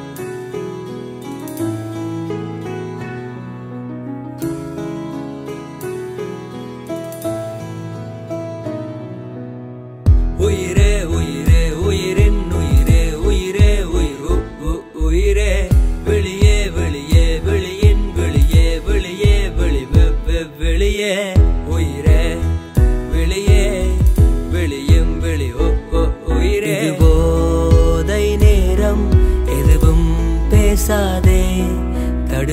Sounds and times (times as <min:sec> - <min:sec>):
Music: 0:00.0 - 0:32.5.